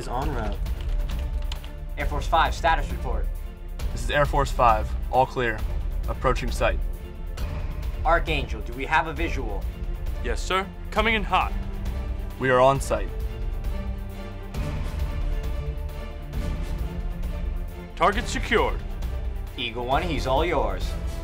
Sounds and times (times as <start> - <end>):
Speech: 0.0 - 0.6, 2.0 - 3.3, 4.0 - 6.8, 8.1 - 9.6, 10.2 - 11.6, 12.4 - 13.1, 18.0 - 18.8, 19.6 - 20.9
Music: 0.0 - 21.2.